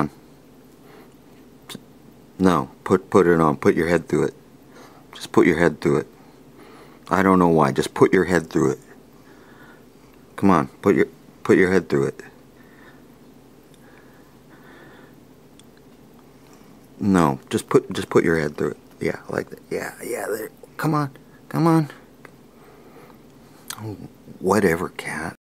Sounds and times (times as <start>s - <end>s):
Speech: 2.4s - 4.4s, 5.2s - 6.1s, 7.1s - 8.9s, 10.4s - 12.4s, 17.0s - 22.0s, 23.7s - 25.4s.